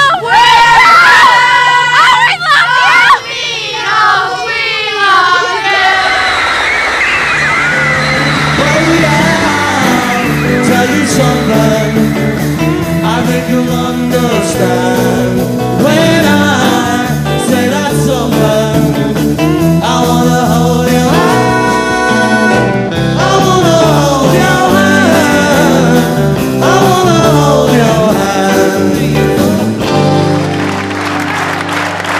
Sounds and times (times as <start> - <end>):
Music: 7.0 - 32.2.